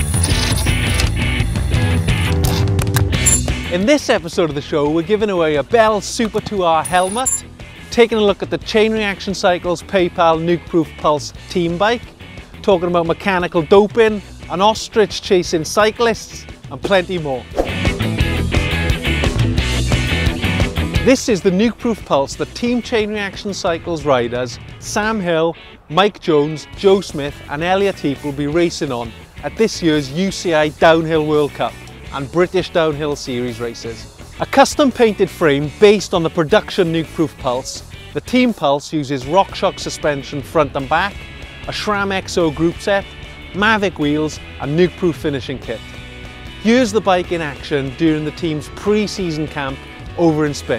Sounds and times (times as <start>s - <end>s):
Music: 0.0s - 50.7s
Speech: 3.7s - 12.0s, 12.6s - 17.5s, 21.0s - 45.8s, 46.6s - 50.7s.